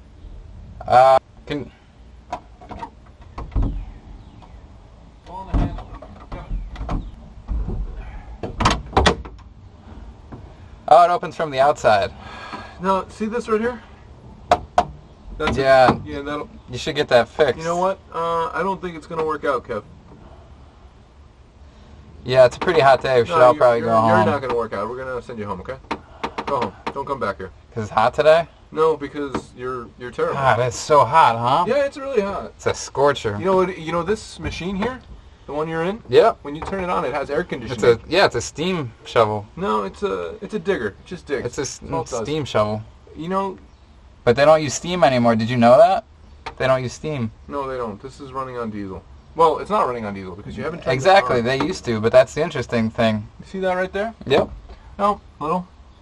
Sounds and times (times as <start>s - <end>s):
Speech: 5.3s - 6.6s, 15.4s - 19.8s, 22.2s - 25.8s, 26.5s - 43.6s, 46.6s - 55.7s.